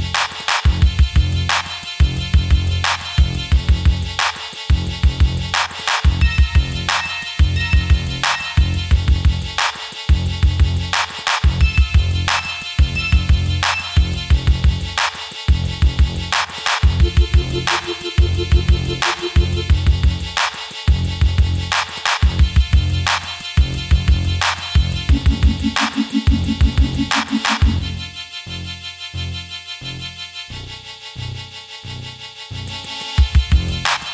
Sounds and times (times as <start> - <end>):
Music: 0.0 - 34.1.